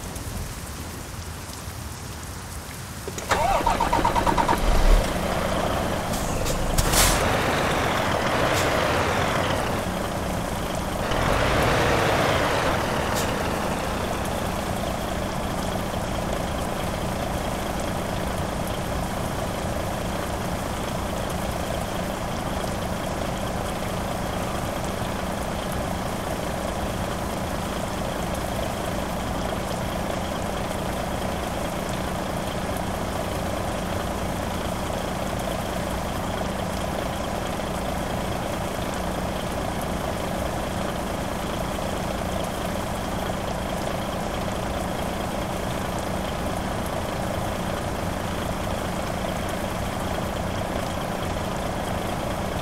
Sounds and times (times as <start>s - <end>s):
Truck: 0.0s - 52.6s.